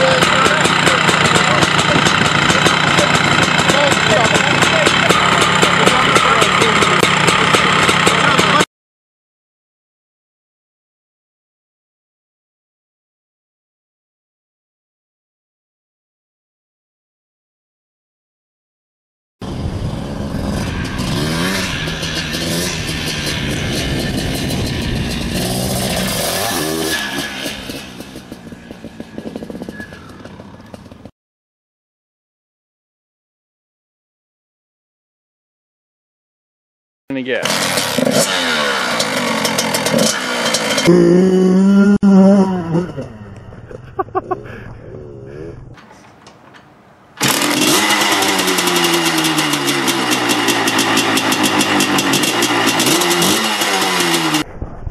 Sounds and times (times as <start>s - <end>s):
Motorcycle: 0.0s - 8.7s, 19.4s - 31.1s, 37.1s - 44.8s, 47.2s - 54.6s.